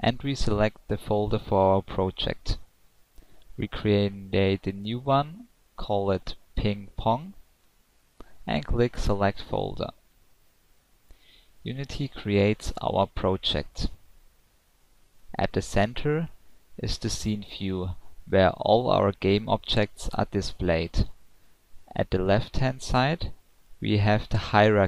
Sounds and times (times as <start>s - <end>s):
Speech: 0.0s - 2.7s, 3.6s - 7.4s, 8.5s - 10.0s, 11.6s - 14.0s, 15.3s - 21.2s, 21.9s - 24.8s.